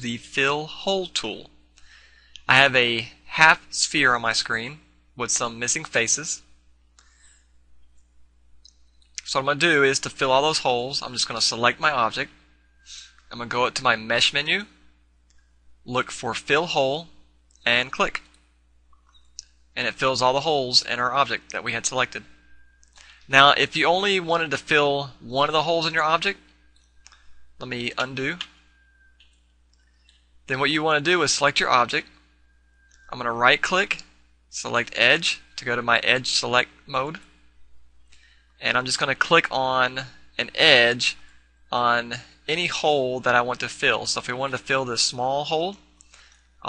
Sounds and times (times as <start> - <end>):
Speech: 0.0 - 1.5, 2.4 - 6.5, 9.2 - 12.3, 12.9 - 14.7, 15.9 - 17.1, 17.7 - 18.2, 19.8 - 22.3, 23.3 - 26.4, 27.6 - 28.5, 30.5 - 32.1, 33.1 - 37.2, 38.6 - 45.8.